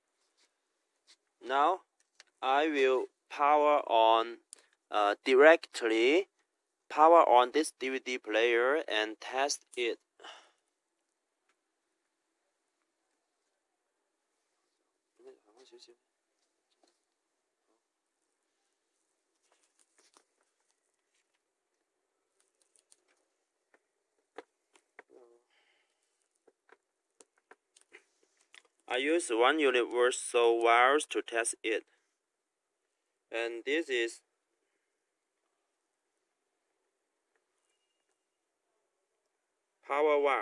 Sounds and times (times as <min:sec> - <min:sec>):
Speech: 0:01.4 - 0:01.8, 0:02.4 - 0:06.3, 0:06.9 - 0:10.0, 0:15.2 - 0:16.0, 0:28.9 - 0:31.9, 0:33.3 - 0:34.2, 0:39.8 - 0:40.4.